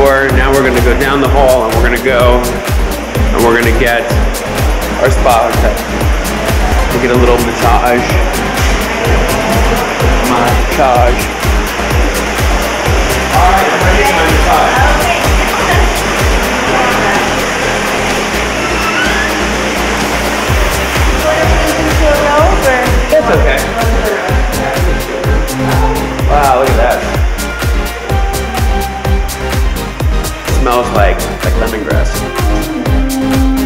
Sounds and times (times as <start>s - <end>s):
Pop music: 0.0s - 33.6s.